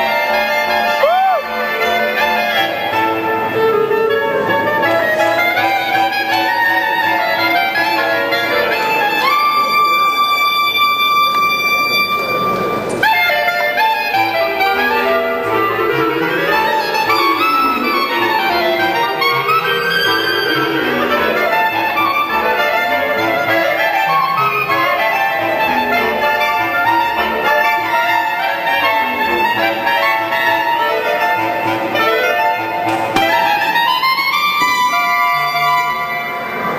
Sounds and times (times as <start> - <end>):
Clarinet: 0.0 - 36.7.